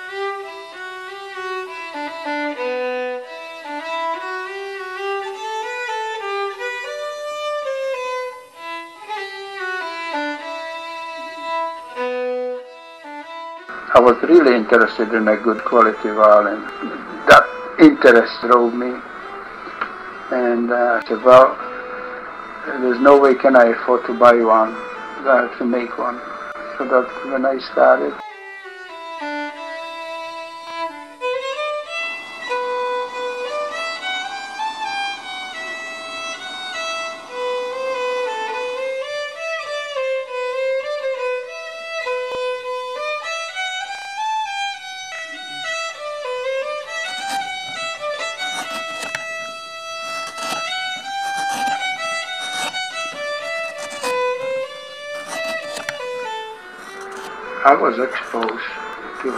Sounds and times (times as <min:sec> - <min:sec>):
Violin, fiddle: 0:00.0 - 0:59.3.